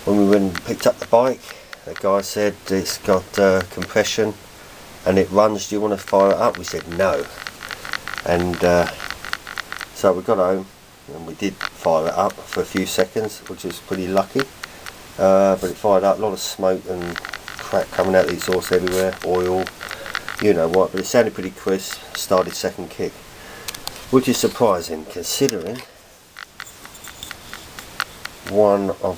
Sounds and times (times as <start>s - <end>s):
Speech: 0.1s - 4.4s, 5.1s - 7.3s, 8.3s - 9.0s, 10.0s - 14.5s, 15.2s - 19.7s, 20.4s - 23.1s, 24.1s - 25.9s, 28.5s - 29.1s.